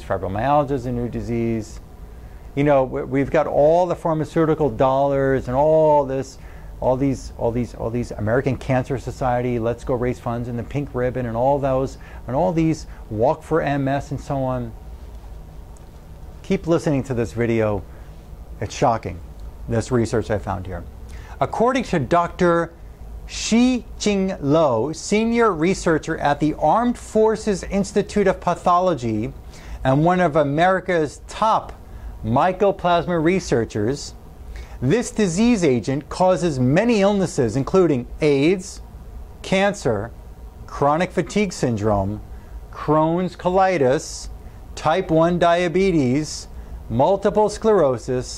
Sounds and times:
Speech: 0:00.0 - 0:01.8, 0:02.6 - 0:14.8, 0:16.4 - 0:17.9, 0:18.6 - 0:34.2, 0:34.8 - 0:38.8, 0:39.4 - 0:48.3.

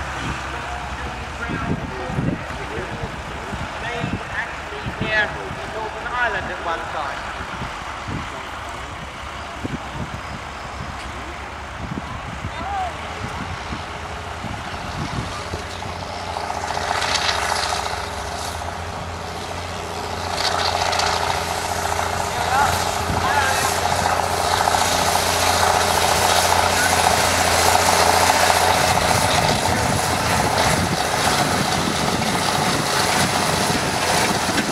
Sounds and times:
Heavy engine (low frequency): 0:00.0 - 0:34.7
Vehicle: 0:00.0 - 0:34.7
Speech: 0:00.2 - 0:07.2, 0:22.3 - 0:24.0.

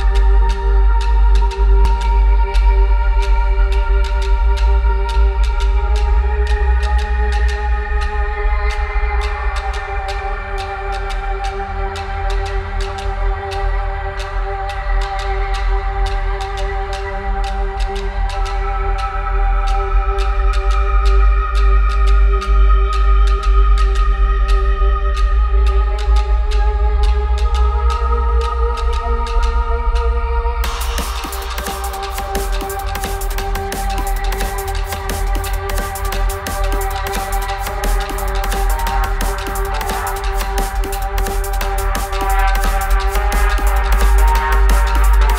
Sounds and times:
Drum and bass: 0:00.0 - 0:45.3.

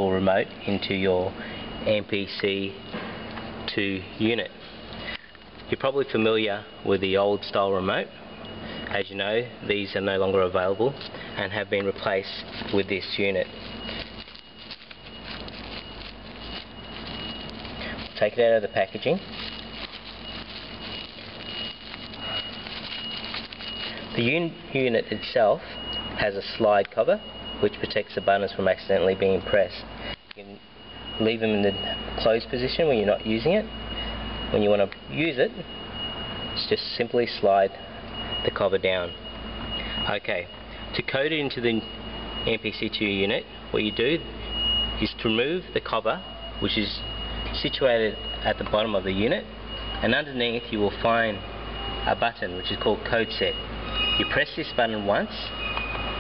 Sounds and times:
Speech: 0:00.0 - 0:02.8, 0:03.7 - 0:04.6, 0:05.7 - 0:08.2, 0:08.9 - 0:13.5, 0:18.2 - 0:19.3, 0:24.2 - 0:25.6, 0:26.2 - 0:30.6, 0:31.2 - 0:33.7, 0:34.5 - 0:35.7, 0:36.6 - 0:37.8, 0:38.4 - 0:39.2, 0:40.1 - 0:44.3, 0:45.0 - 0:51.4, 0:52.1 - 0:53.6, 0:54.2 - 0:55.6.

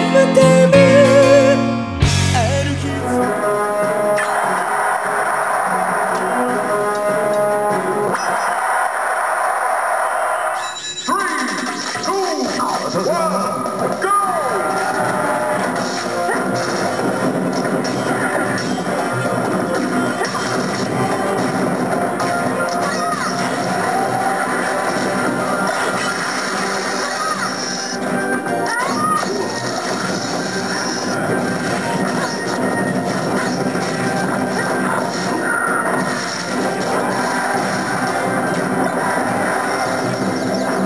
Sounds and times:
Music: 0:00.0 - 0:08.2, 0:12.1 - 0:40.8
Smash, crash: 0:14.6 - 0:28.0, 0:28.9 - 0:40.8.

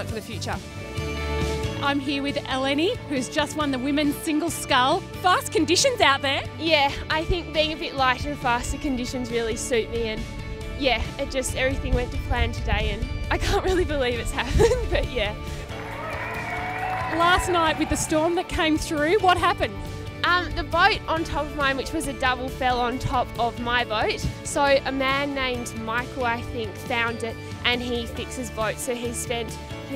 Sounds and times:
Speech: 0:00.0 - 0:00.6, 0:01.8 - 0:10.2, 0:10.8 - 0:15.4, 0:17.2 - 0:29.9
Music: 0:00.0 - 0:29.9.

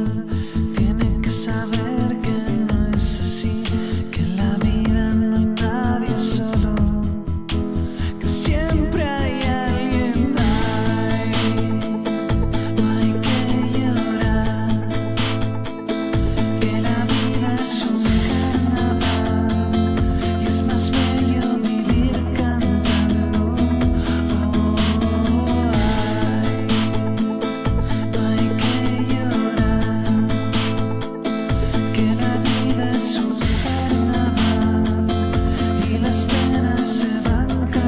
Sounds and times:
Music of Latin America: 0:00.0 - 0:37.8.

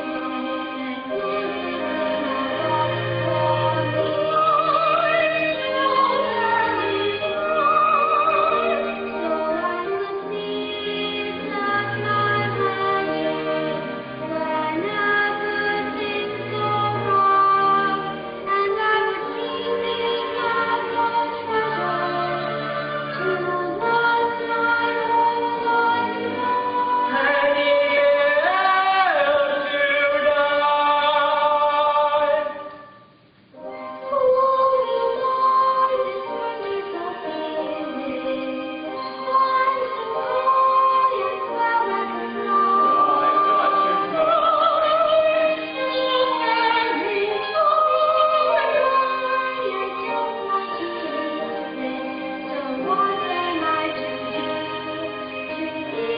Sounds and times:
Music: 0:00.0 - 0:56.1.

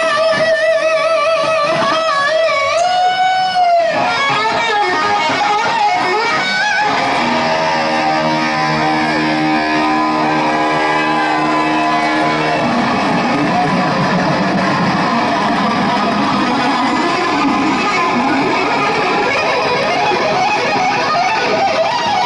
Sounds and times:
Electric guitar: 0:00.0 - 0:22.2.

